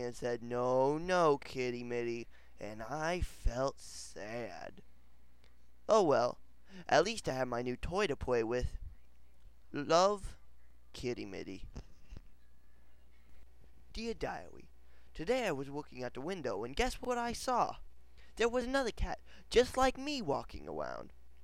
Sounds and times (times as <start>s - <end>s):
Speech: 0.0s - 4.8s, 5.9s - 8.8s, 9.7s - 11.9s, 13.9s - 17.8s, 18.4s - 21.1s.